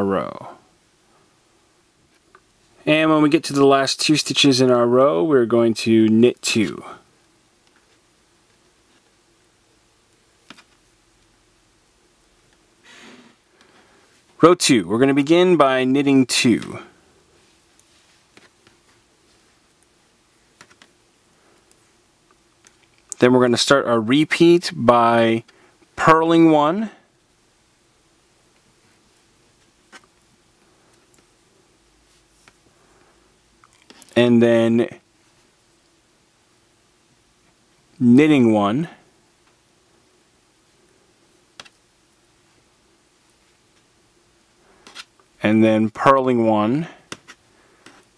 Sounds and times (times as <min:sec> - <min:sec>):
Speech: 0:00.0 - 0:00.6, 0:02.8 - 0:07.0, 0:14.4 - 0:16.9, 0:23.2 - 0:27.0, 0:34.2 - 0:35.0, 0:38.0 - 0:39.0, 0:45.4 - 0:47.0.